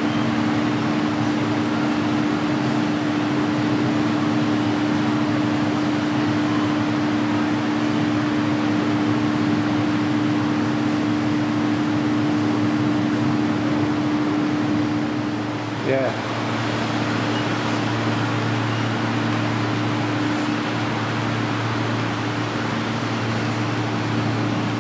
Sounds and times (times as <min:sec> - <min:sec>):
Speech: 0:15.8 - 0:16.2.